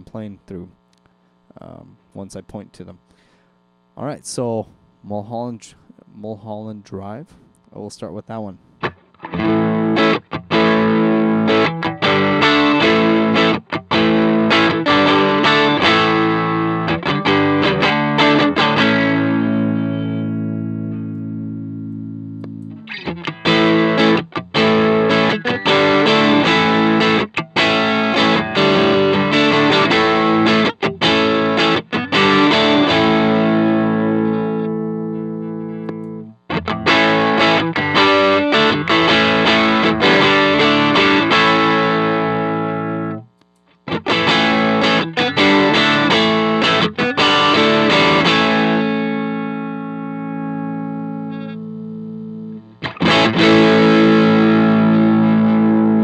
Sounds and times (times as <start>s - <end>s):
Distortion: 0.0s - 56.0s
Guitar: 0.0s - 56.0s
Chorus effect: 8.8s - 56.0s.